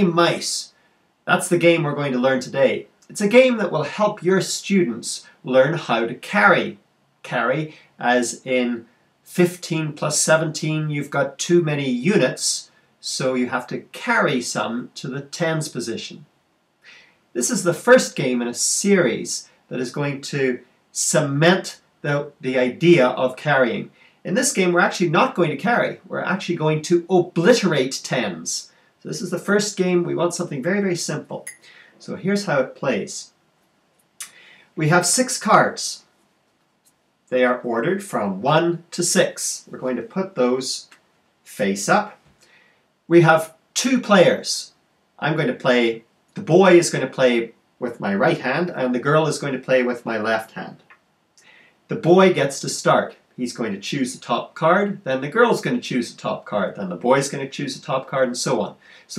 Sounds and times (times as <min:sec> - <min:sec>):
Speech: 0:00.0 - 0:16.3, 0:17.3 - 0:33.4, 0:34.2 - 0:36.1, 0:37.3 - 0:42.2, 0:43.1 - 0:50.9, 0:51.9 - 0:59.1.